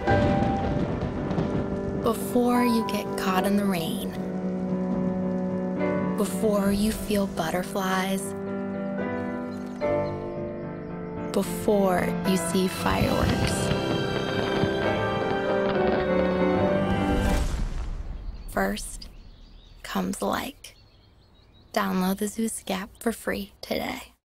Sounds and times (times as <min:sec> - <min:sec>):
Music: 0:00.0 - 0:17.8
Speech: 0:02.1 - 0:04.2, 0:06.2 - 0:08.4, 0:11.4 - 0:13.7, 0:18.5 - 0:19.1, 0:19.8 - 0:20.8, 0:21.7 - 0:24.2.